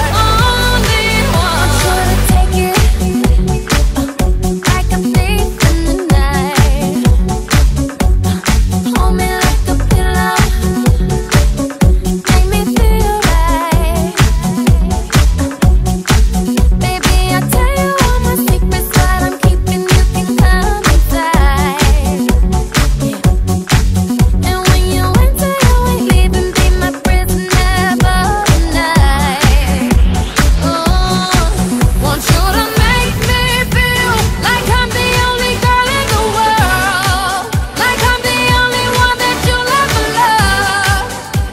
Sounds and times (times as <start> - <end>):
Dance music: 0.0 - 41.5.